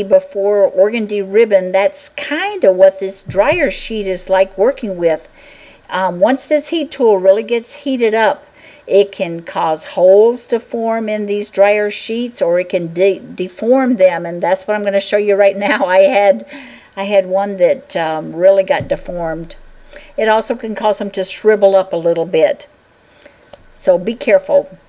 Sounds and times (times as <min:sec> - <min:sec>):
Narration, monologue: 0:00.0 - 0:24.8.